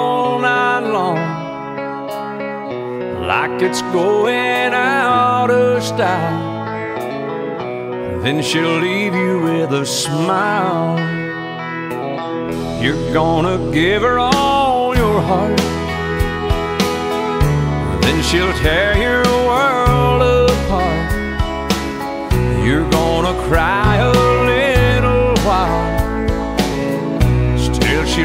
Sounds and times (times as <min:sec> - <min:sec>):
Keyboard (musical): 0:00.0 - 0:28.2.